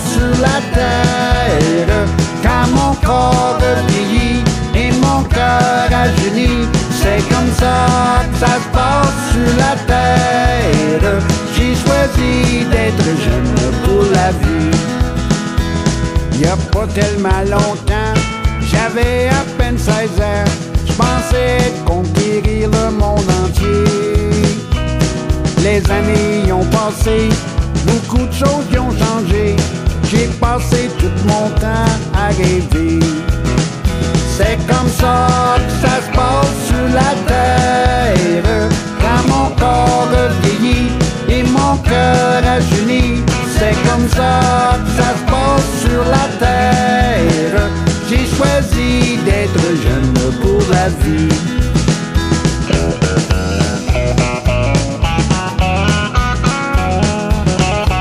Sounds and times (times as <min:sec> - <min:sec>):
Music: 0:00.0 - 0:58.0.